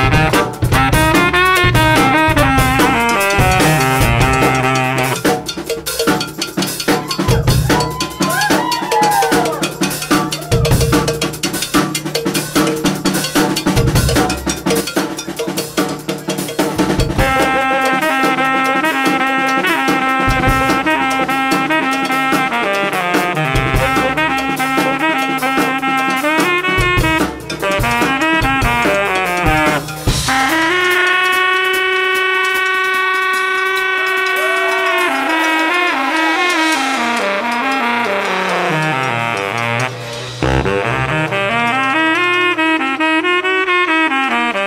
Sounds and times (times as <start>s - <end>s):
Music: 0.0s - 44.6s.